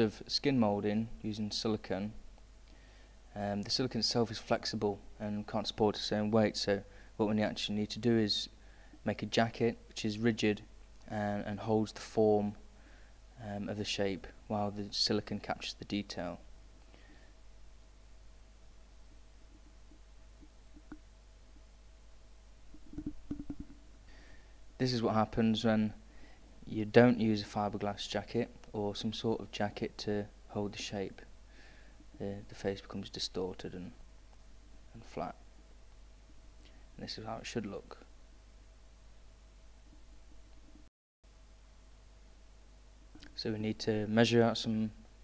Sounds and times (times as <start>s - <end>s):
Speech: 0.0s - 2.2s, 3.3s - 12.6s, 13.4s - 16.4s, 24.8s - 26.0s, 26.6s - 31.3s, 32.2s - 34.0s, 34.9s - 35.4s, 37.0s - 38.1s, 43.2s - 45.0s.